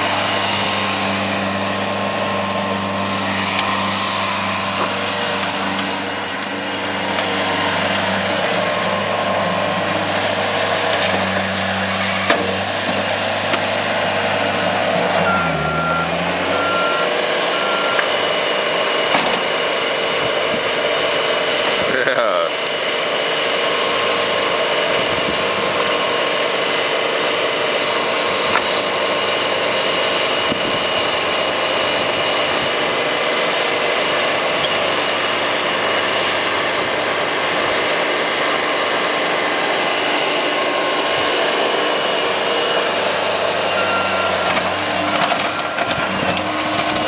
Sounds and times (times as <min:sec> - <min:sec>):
Outside, rural or natural: 0:00.0 - 0:47.0
Vehicle: 0:00.0 - 0:47.0
Speech: 0:21.9 - 0:22.6.